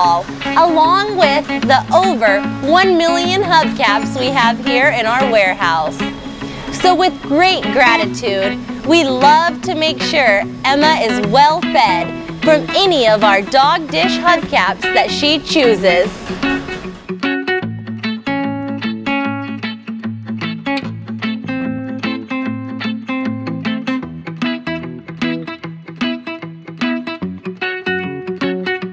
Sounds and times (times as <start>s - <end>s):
Speech: 0.0s - 6.0s, 6.8s - 16.2s
Music: 0.0s - 28.9s.